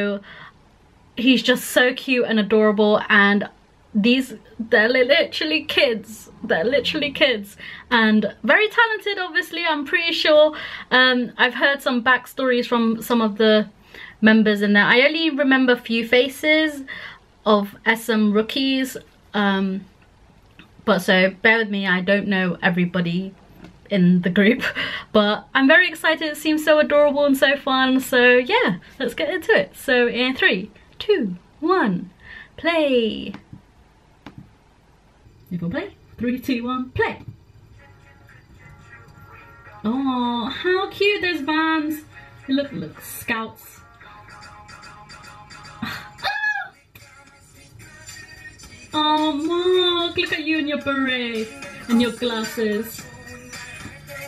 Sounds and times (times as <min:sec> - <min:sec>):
Speech: 0:00.0 - 0:00.2, 0:01.2 - 0:16.9, 0:17.5 - 0:19.9, 0:20.8 - 0:33.5, 0:35.5 - 0:37.3, 0:39.8 - 0:43.8, 0:49.0 - 0:53.0.